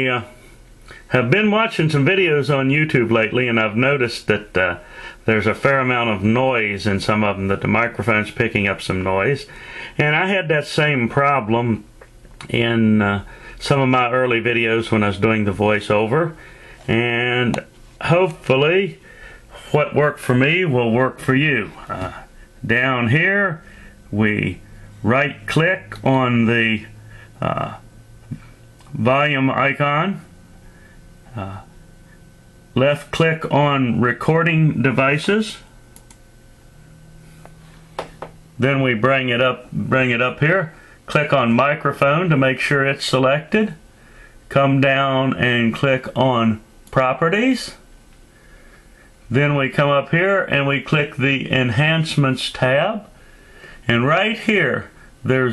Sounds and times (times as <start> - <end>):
Speech: 0.0 - 0.4, 1.0 - 27.8, 28.9 - 30.3, 31.3 - 31.8, 32.7 - 35.7, 38.6 - 43.8, 44.5 - 47.8, 49.3 - 53.2, 53.8 - 55.5.